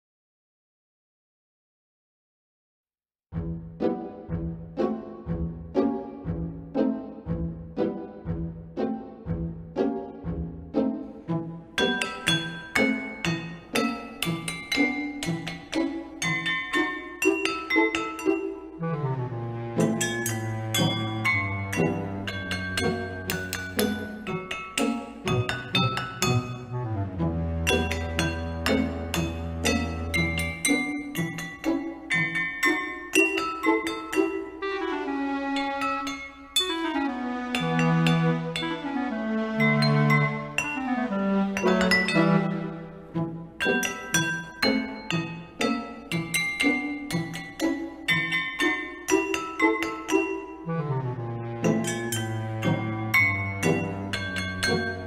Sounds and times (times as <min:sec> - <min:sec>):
Music: 0:03.3 - 0:55.0
Chink, clink: 0:11.8 - 0:18.5, 0:20.0 - 0:26.6, 0:27.7 - 0:34.4, 0:41.6 - 0:42.3, 0:43.6 - 0:50.5, 0:53.2 - 0:55.0.